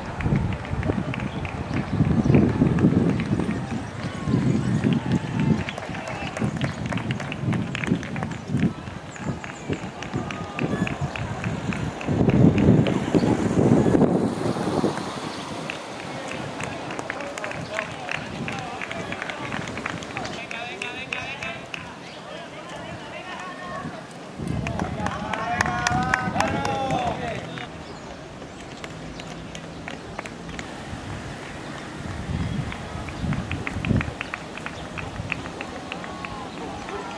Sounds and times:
Run: 0.0s - 13.3s, 15.6s - 30.8s, 31.6s - 37.1s
Outside, urban or manmade: 0.0s - 37.1s
Speech: 16.0s - 27.8s, 35.6s - 37.1s.

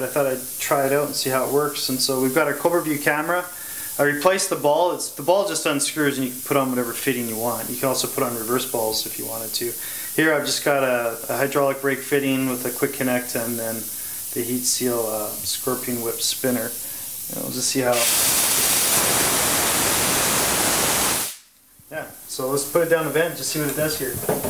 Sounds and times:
Speech: 0.0s - 18.1s, 21.9s - 24.3s.

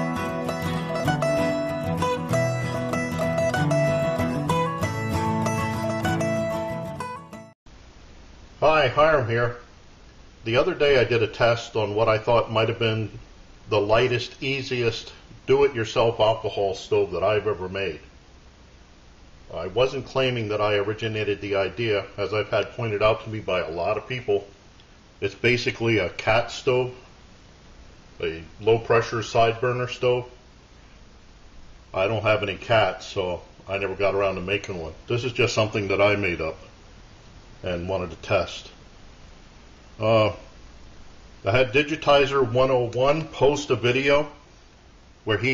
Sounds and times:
Speech: 8.6s - 9.7s, 10.4s - 18.1s, 19.5s - 24.5s, 25.2s - 27.1s, 28.2s - 30.4s, 31.9s - 36.7s, 37.6s - 38.8s, 40.0s - 40.5s, 41.4s - 44.4s, 45.3s - 45.5s.

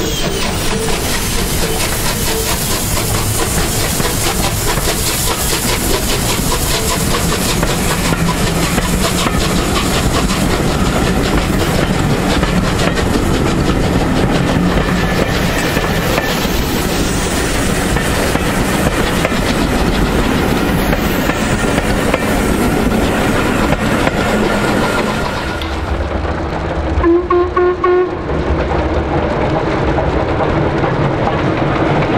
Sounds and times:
Railroad car, train wagon: 0.0s - 32.1s
Train: 0.0s - 32.1s.

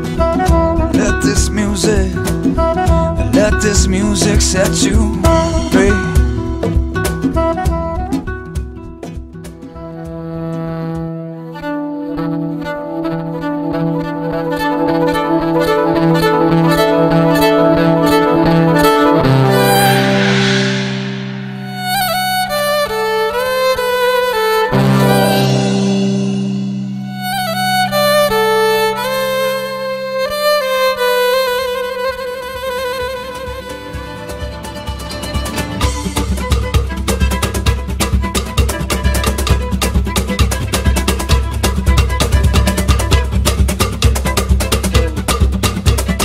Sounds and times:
Music: 0.0s - 46.2s.

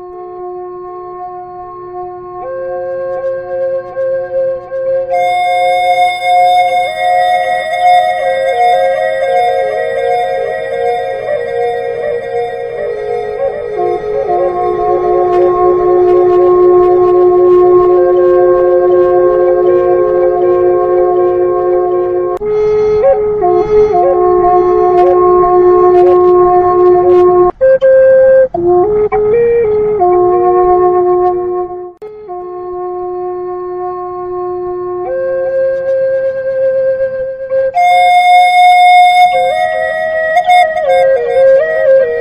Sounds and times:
Flute: 0.0s - 42.2s.

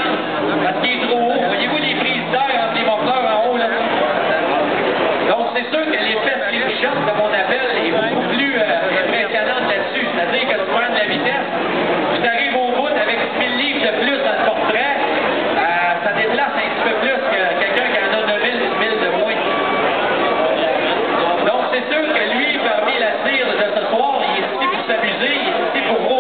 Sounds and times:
Speech: 0.0s - 19.6s, 20.3s - 26.2s.

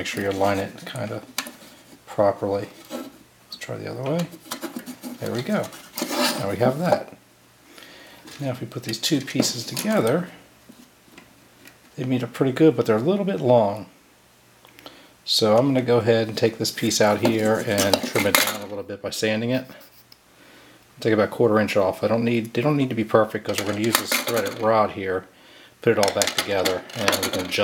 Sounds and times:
Speech: 0.0s - 1.3s, 2.1s - 2.8s, 3.5s - 4.4s, 5.2s - 7.2s, 8.3s - 10.4s, 12.0s - 14.0s, 15.3s - 19.9s, 21.0s - 27.6s.

